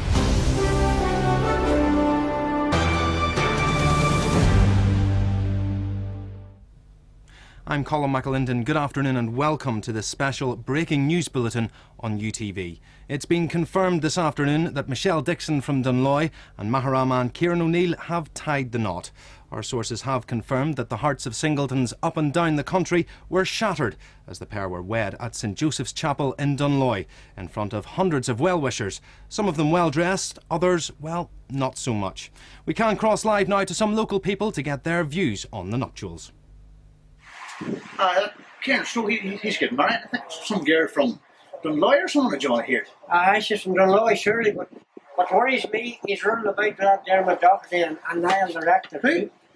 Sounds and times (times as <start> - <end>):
Speech: 7.6 - 36.4, 38.0 - 49.3.